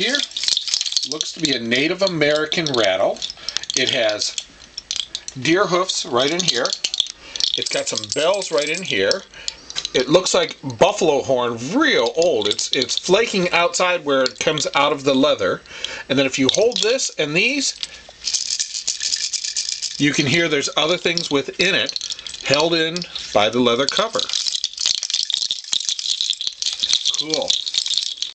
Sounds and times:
Rattle: 0.0 - 11.2, 11.8 - 28.3
Rattle (instrument): 0.0 - 11.2, 11.8 - 28.3
Inside, small room: 0.0 - 28.3
Speech: 1.1 - 3.2, 3.8 - 4.4, 5.4 - 6.8, 7.6 - 9.3, 10.0 - 17.8, 20.0 - 24.4, 27.2 - 27.5.

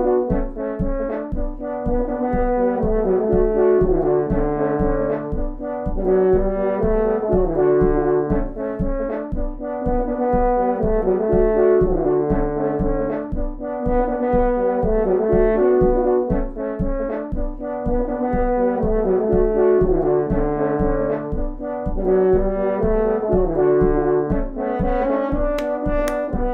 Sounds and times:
Saxophone: 0.0 - 26.5.

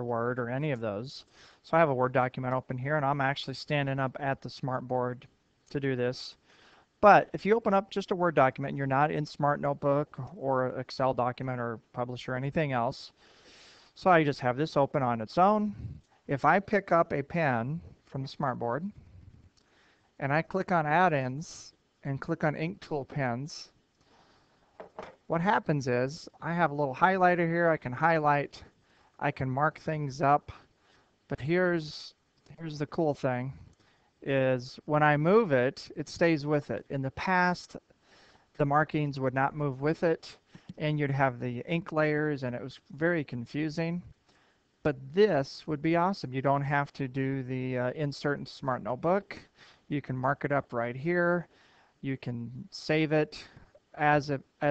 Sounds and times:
Speech: 0.0 - 6.4, 7.0 - 13.2, 14.0 - 19.0, 20.2 - 23.8, 25.3 - 30.7, 31.3 - 37.8, 38.6 - 44.1, 44.8 - 54.7.

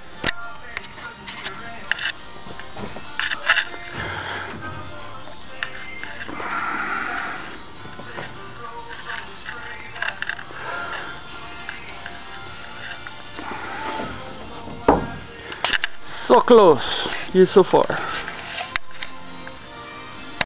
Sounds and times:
Music: 0.0 - 20.4
Door: 14.0 - 15.3
Speech: 16.1 - 18.1.

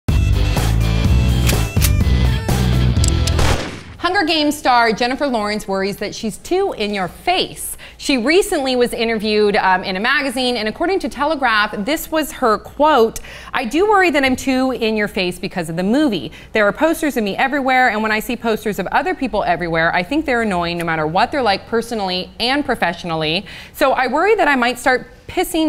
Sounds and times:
Music: 0.1 - 3.6
Speech: 4.0 - 25.6.

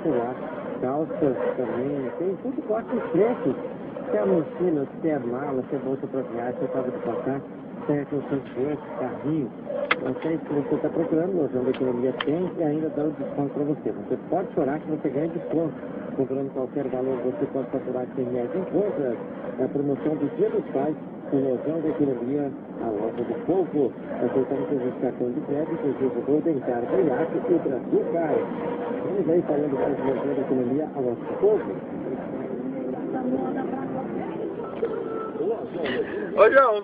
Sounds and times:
Speech: 0.0 - 36.8.

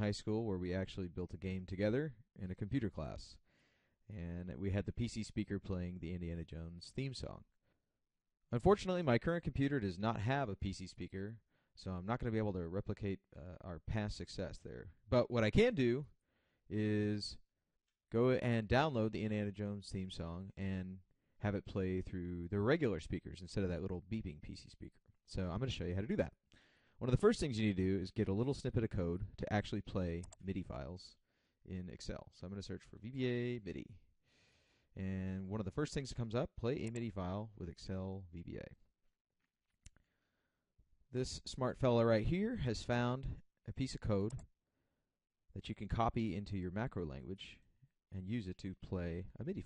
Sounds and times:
Speech: 0.0 - 3.4, 4.1 - 7.6, 8.5 - 17.5, 18.1 - 26.4, 27.0 - 34.1, 35.0 - 38.8, 41.1 - 44.5, 45.6 - 49.6.

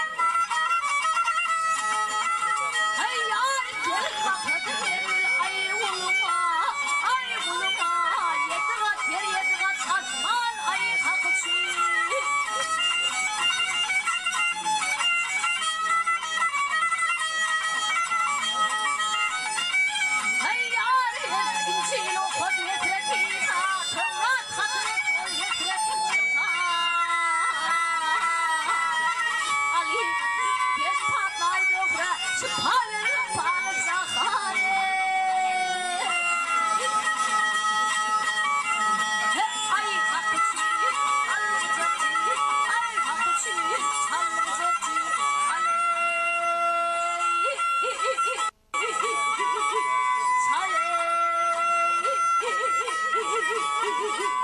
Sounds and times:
Music: 0.0 - 54.4.

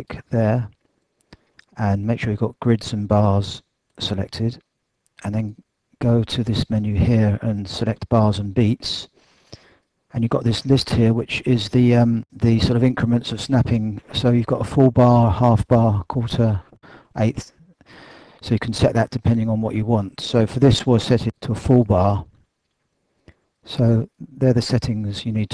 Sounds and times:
Speech: 0.0 - 0.8, 1.6 - 4.6, 5.2 - 9.1, 10.1 - 17.6, 18.4 - 22.4, 23.7 - 25.5.

